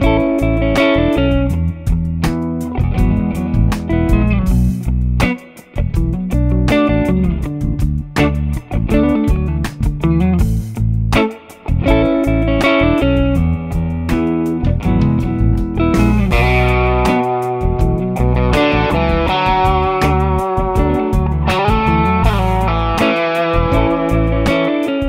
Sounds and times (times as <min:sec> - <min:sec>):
Music: 0:00.0 - 0:25.0.